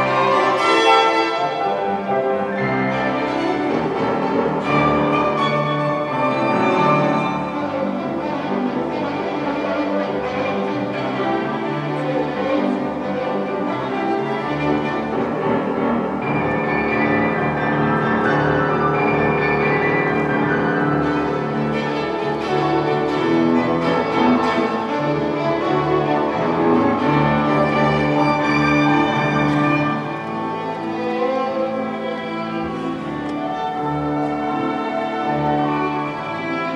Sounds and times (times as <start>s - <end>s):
Violin, fiddle: 0.0s - 36.7s.